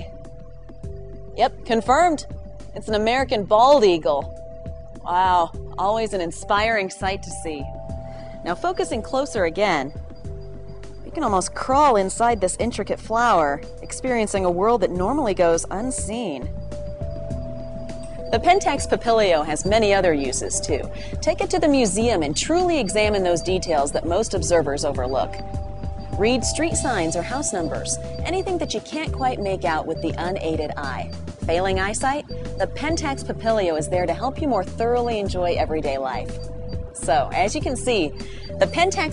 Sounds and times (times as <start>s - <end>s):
Music: 0.0s - 39.1s
Speech: 1.4s - 2.2s, 2.8s - 4.3s, 5.1s - 7.7s, 8.4s - 9.9s, 11.1s - 16.5s, 18.3s - 25.4s, 26.2s - 36.3s, 37.0s - 39.1s.